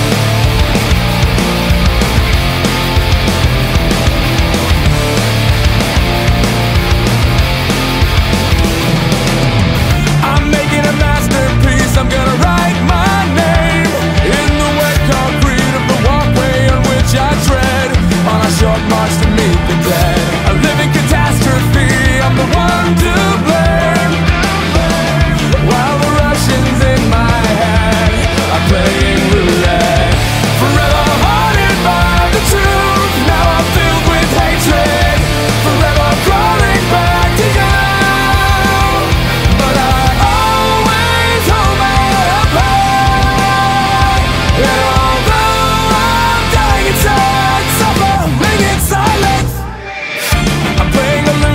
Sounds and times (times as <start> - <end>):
Music: 0.0 - 51.5.